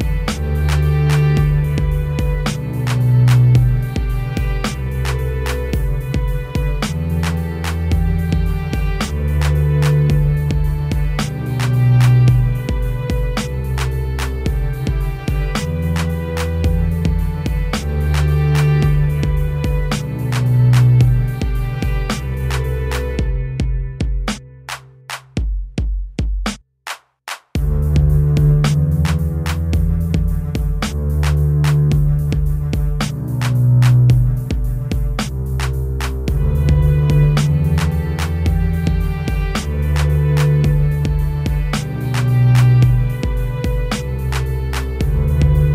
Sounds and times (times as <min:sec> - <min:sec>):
Music: 0:00.0 - 0:45.7.